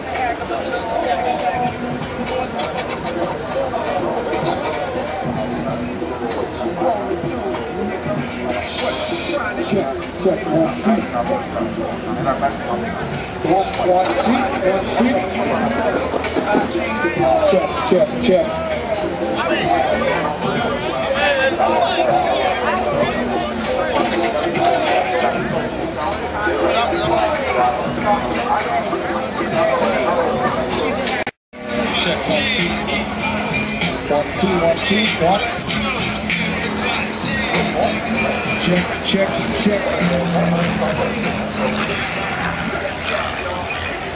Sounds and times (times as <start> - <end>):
Speech: 0.0 - 44.1.